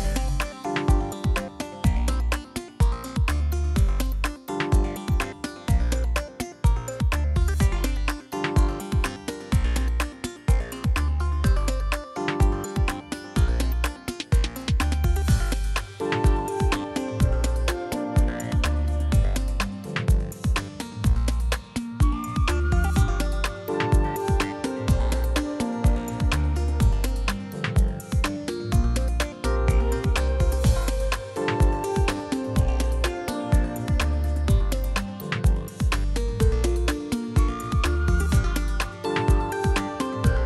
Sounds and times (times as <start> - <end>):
Music: 0.0 - 40.4.